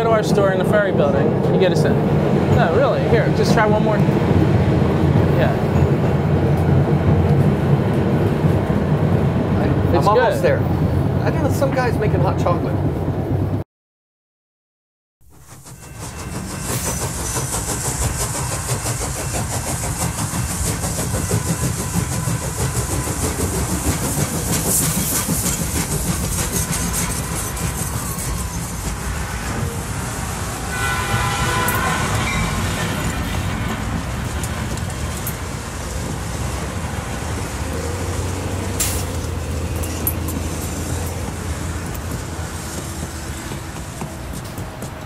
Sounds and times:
Traffic noise, roadway noise: 0:00.0 - 0:13.6, 0:15.7 - 0:45.0
Outside, urban or manmade: 0:00.0 - 0:13.7, 0:15.2 - 0:45.0.

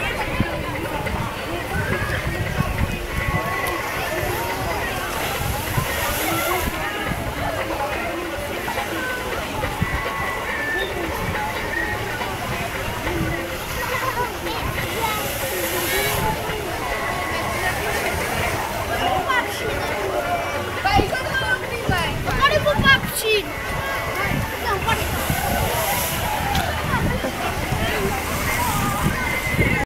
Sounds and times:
Speech: 0:00.0 - 0:29.8
Stream: 0:00.0 - 0:29.8.

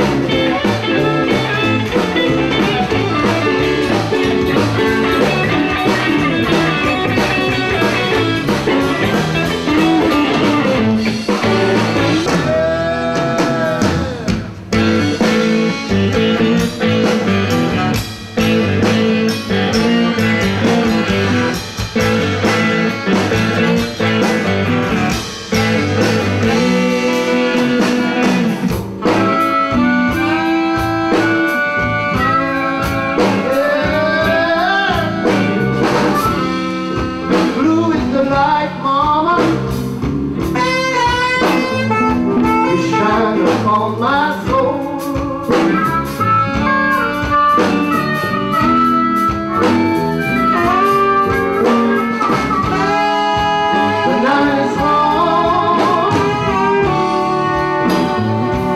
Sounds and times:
Blues: 0:00.0 - 0:58.7
Guitar: 0:00.0 - 0:58.7.

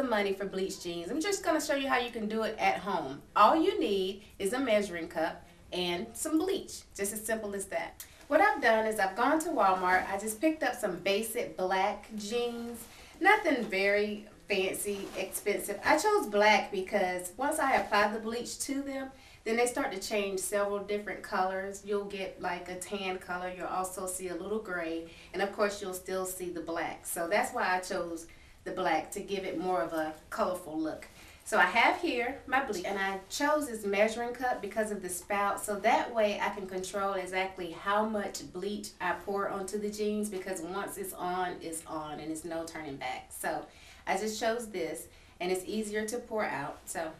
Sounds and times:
Speech: 0:00.0 - 0:47.1.

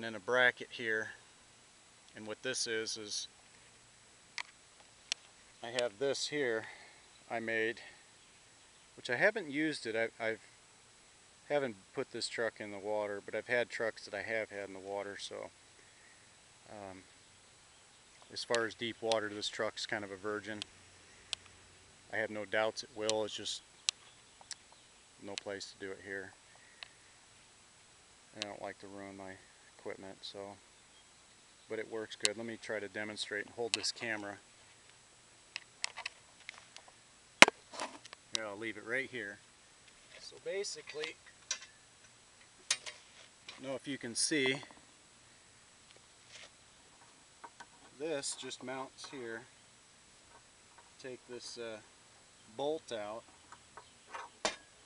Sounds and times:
Speech: 0:00.0 - 0:01.2, 0:02.2 - 0:03.3, 0:05.6 - 0:08.0, 0:09.0 - 0:10.5, 0:11.5 - 0:15.5, 0:16.7 - 0:17.1, 0:18.3 - 0:20.7, 0:22.1 - 0:23.6, 0:25.2 - 0:26.4, 0:28.3 - 0:30.6, 0:31.7 - 0:34.4, 0:38.4 - 0:39.4, 0:40.1 - 0:41.2, 0:43.5 - 0:44.8, 0:48.0 - 0:49.5, 0:51.0 - 0:51.9, 0:52.5 - 0:53.2.

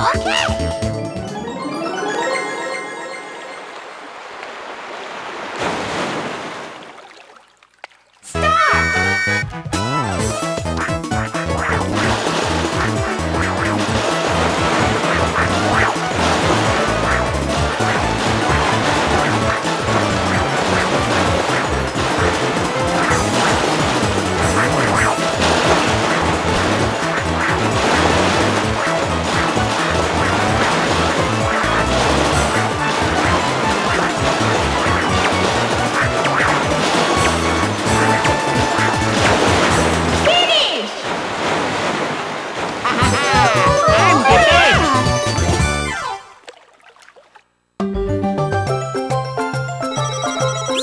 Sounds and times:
Music: 0:00.0 - 0:03.7, 0:08.4 - 0:40.4, 0:42.9 - 0:46.3, 0:47.8 - 0:50.8
Speech: 0:08.3 - 0:09.1, 0:40.2 - 0:41.0, 0:42.9 - 0:45.1.

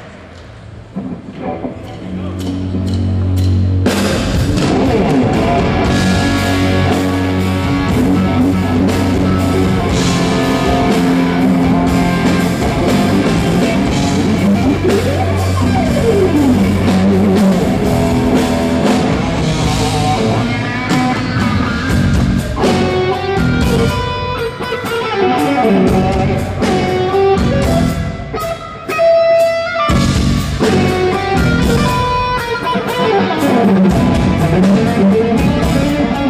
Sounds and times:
Electric guitar: 0:01.0 - 0:36.2.

